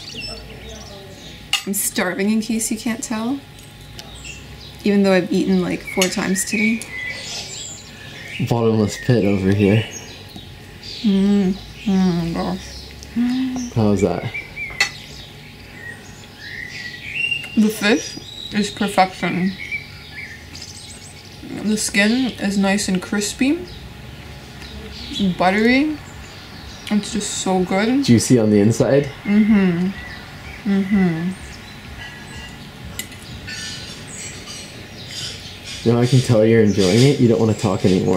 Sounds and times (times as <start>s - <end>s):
Chirp, tweet: 0.0s - 1.4s, 5.8s - 22.4s, 29.9s - 38.1s.